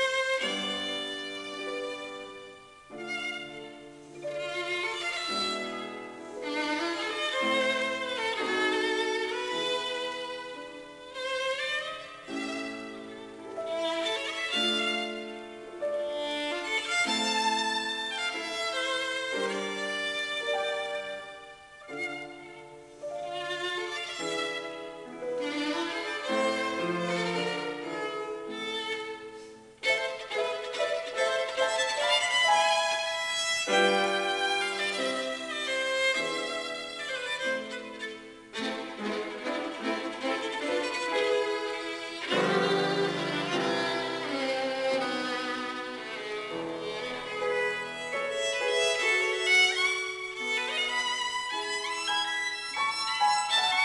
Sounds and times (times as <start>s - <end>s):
Violin, fiddle: 0.0s - 53.8s.